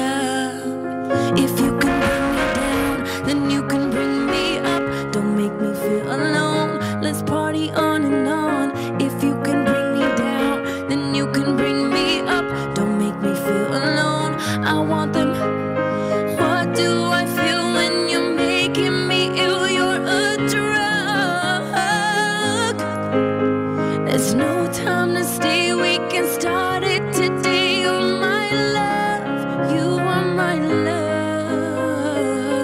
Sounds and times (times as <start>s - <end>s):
Music: 0.0s - 32.6s.